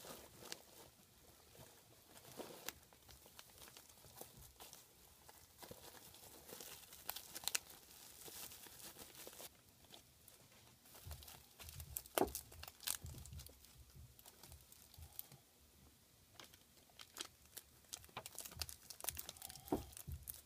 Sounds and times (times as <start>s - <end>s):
Crumpling, crinkling: 0.0s - 15.4s, 16.3s - 20.4s.